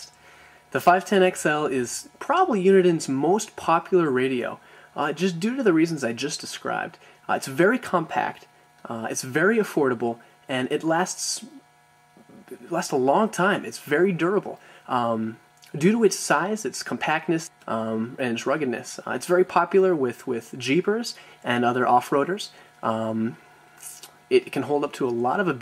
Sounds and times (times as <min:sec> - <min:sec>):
Speech: 0:00.7 - 0:11.6, 0:12.2 - 0:25.6.